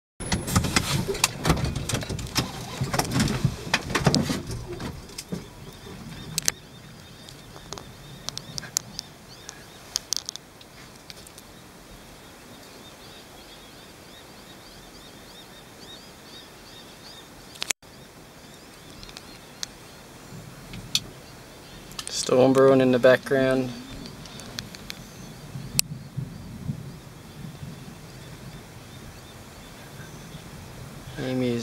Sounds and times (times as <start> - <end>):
Outside, rural or natural: 0.2 - 31.6
Bird: 1.1 - 31.6.